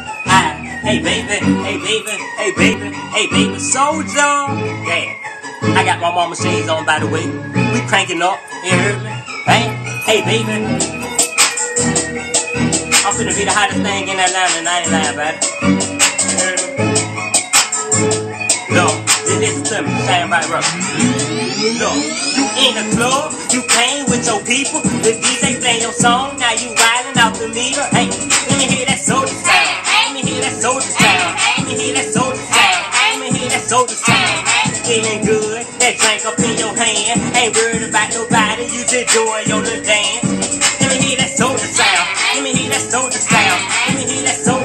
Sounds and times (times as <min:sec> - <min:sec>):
Music: 0:00.0 - 0:44.6
Speech: 0:07.8 - 0:10.8, 0:13.0 - 0:15.4, 0:18.7 - 0:20.7.